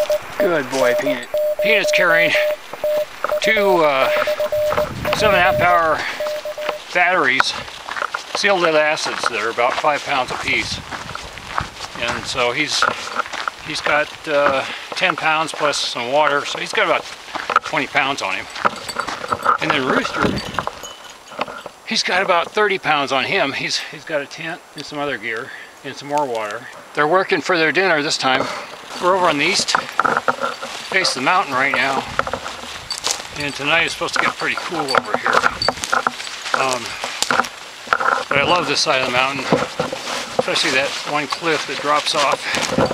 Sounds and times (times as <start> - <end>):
Speech: 0.4 - 2.5, 3.4 - 4.3, 5.1 - 6.2, 6.9 - 7.6, 8.4 - 10.8, 12.0 - 12.9, 13.6 - 17.0, 17.6 - 18.5, 19.6 - 20.4, 21.9 - 29.9, 30.9 - 32.1, 33.4 - 35.4, 36.6 - 37.0, 38.3 - 39.6, 40.4 - 42.7.